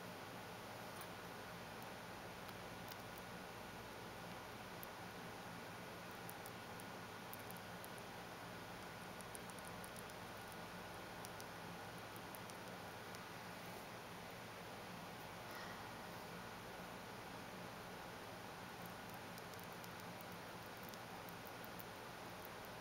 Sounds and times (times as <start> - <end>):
Mouse: 2.5 - 3.3, 6.1 - 6.6, 7.3 - 8.1, 9.2 - 10.6, 11.2 - 11.5, 12.1 - 13.3, 18.8 - 22.8.